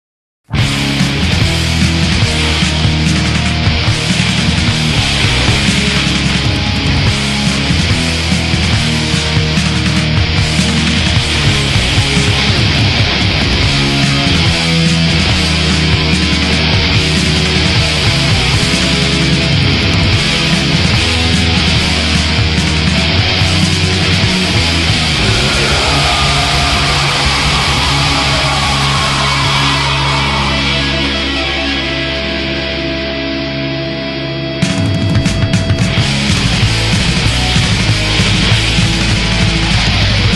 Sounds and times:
Angry music: 0.5 - 40.3
Heavy metal: 0.5 - 40.3
Punk rock: 0.5 - 40.3.

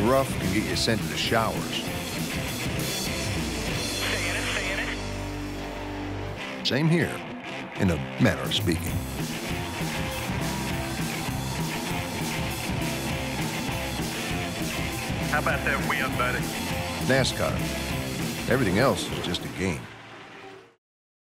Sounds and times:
Speech: 0.0 - 1.8, 4.0 - 5.0, 6.7 - 7.2, 7.8 - 9.0, 15.3 - 17.6, 18.5 - 19.9
Music: 0.0 - 20.8.

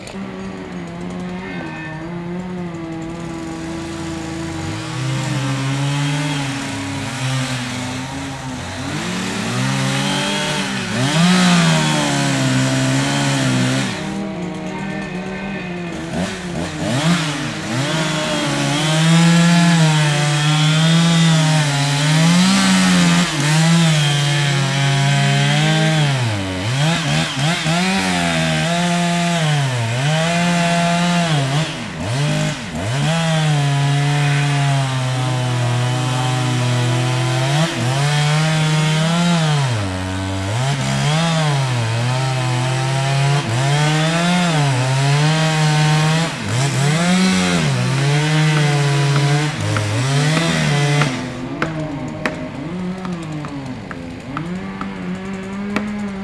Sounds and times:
Chainsaw: 0.0 - 56.2.

